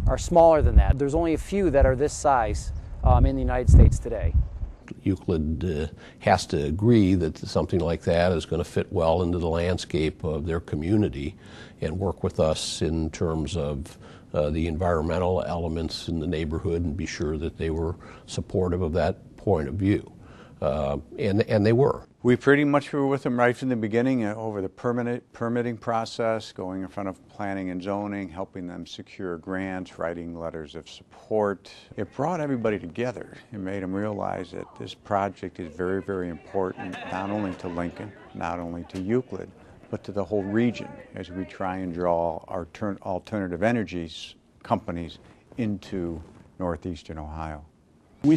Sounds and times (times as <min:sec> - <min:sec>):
Speech: 0:00.0 - 0:04.3, 0:04.9 - 0:48.3.